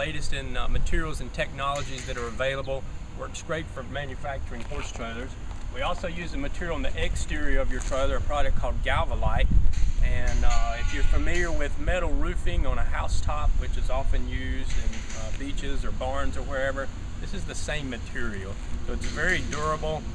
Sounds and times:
Speech: 0:00.0 - 0:20.0.

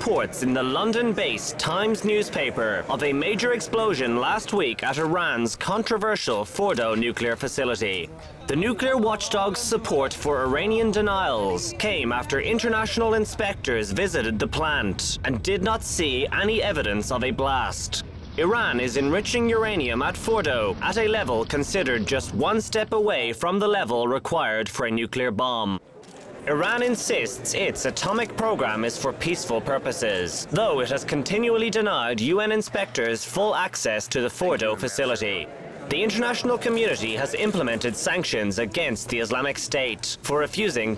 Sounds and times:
Speech: 0:00.0 - 0:25.8, 0:26.5 - 0:40.9.

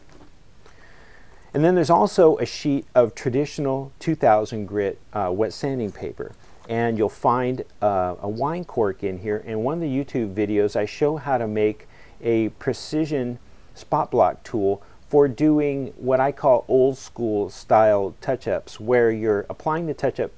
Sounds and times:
Speech: 0:01.5 - 0:20.3.

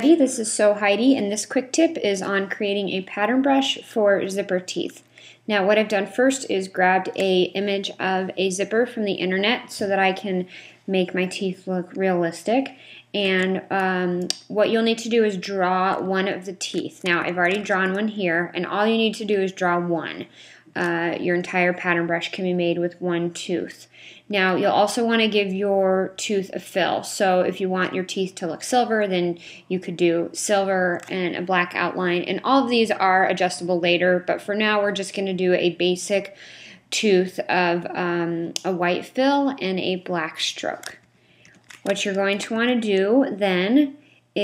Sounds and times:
Speech: 0:00.0 - 0:41.0, 0:41.9 - 0:44.4.

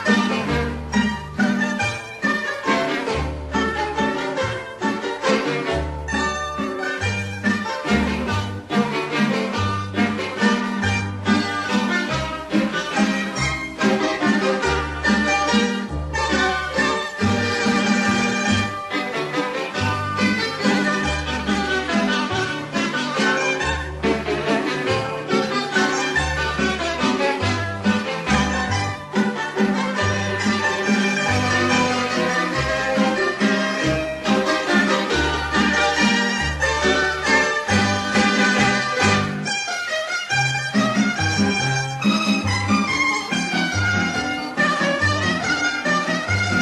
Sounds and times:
Music: 0:00.0 - 0:46.6.

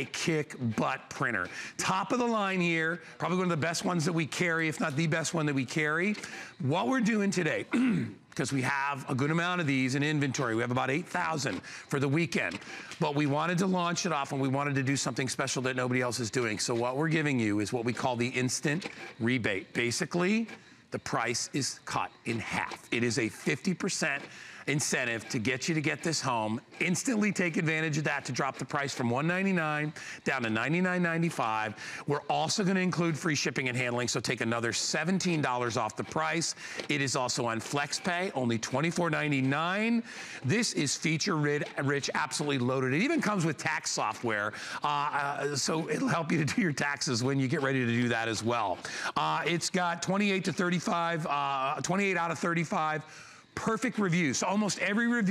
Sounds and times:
Printer: 0:00.0 - 0:55.3
Speech: 0:00.0 - 0:55.3.

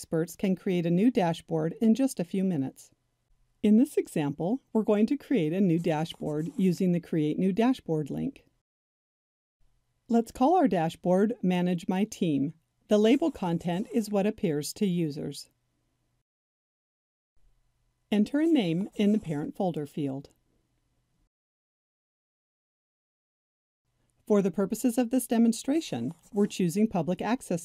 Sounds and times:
Speech: 0:00.0 - 0:02.9, 0:03.7 - 0:08.5, 0:10.1 - 0:15.5, 0:18.2 - 0:20.4, 0:24.3 - 0:27.6.

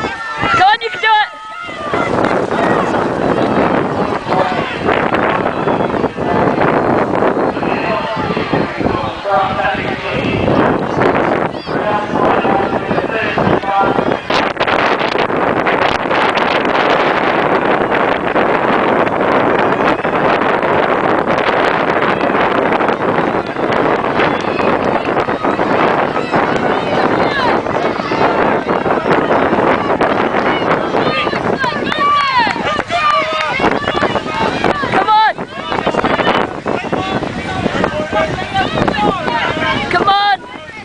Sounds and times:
Outside, rural or natural: 0:00.0 - 0:40.8.

